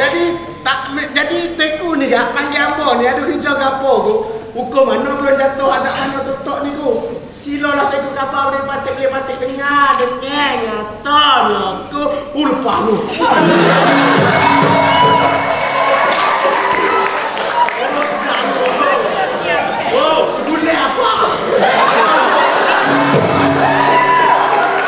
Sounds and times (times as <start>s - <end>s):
Speech: 0.0s - 13.3s, 17.6s - 22.5s
Music: 13.4s - 17.4s, 22.8s - 24.8s.